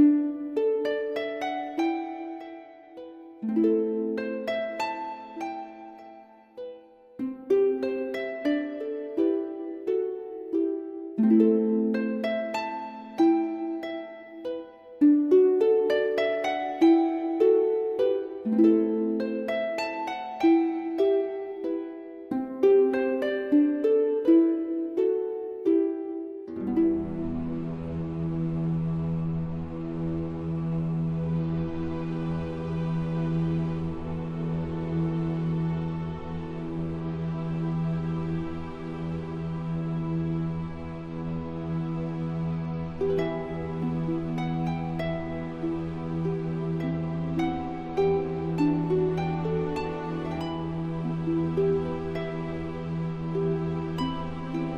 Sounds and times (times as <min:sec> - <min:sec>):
Music: 0:00.0 - 0:54.7.